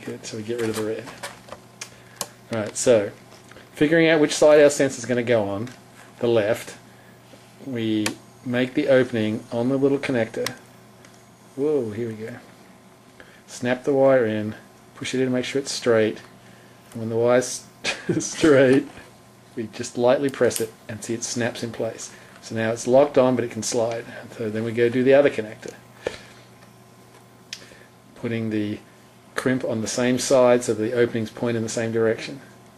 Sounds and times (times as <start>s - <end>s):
Speech: 0.0s - 1.2s, 2.5s - 3.2s, 3.8s - 6.8s, 7.6s - 10.7s, 11.6s - 12.5s, 13.5s - 16.3s, 17.0s - 25.8s, 28.2s - 32.6s.